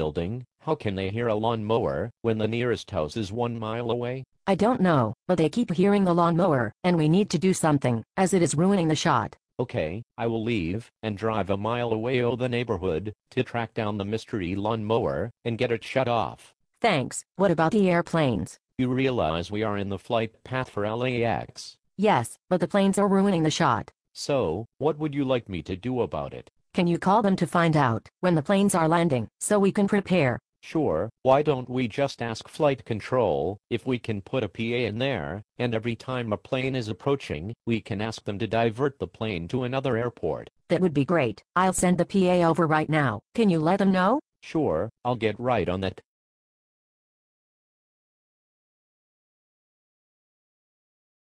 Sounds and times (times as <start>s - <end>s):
Speech: 0.0s - 46.0s.